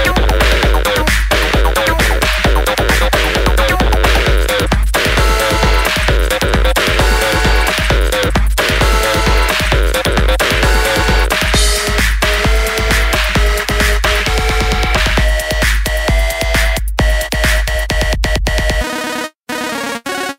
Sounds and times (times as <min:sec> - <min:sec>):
Techno: 0:00.0 - 0:20.3.